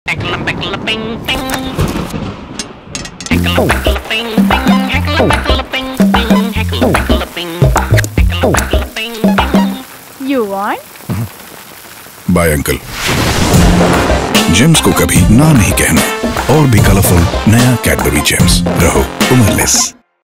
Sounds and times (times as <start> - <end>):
Speech: 0.1 - 1.9, 12.3 - 12.8, 14.5 - 20.0
Rain on surface: 0.1 - 19.8
Music: 3.3 - 9.9, 13.6 - 20.2.